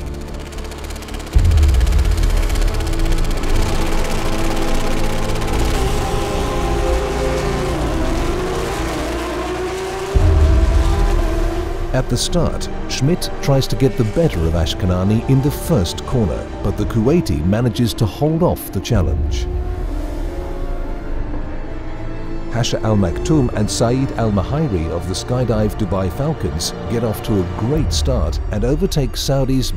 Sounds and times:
Race car, auto racing: 0.0s - 28.2s.

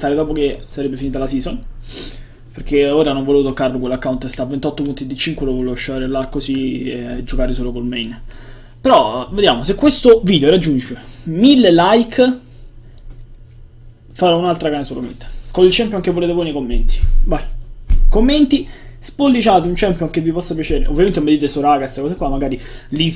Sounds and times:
Speech: 0.0s - 1.7s, 2.6s - 8.2s, 8.8s - 12.5s, 14.2s - 23.1s.

